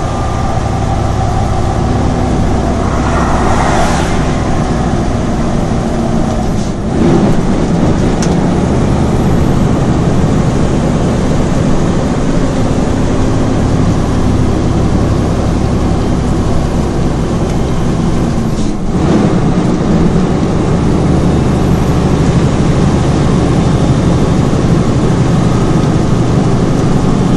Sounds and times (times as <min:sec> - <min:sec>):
Vehicle: 0:00.0 - 0:27.3.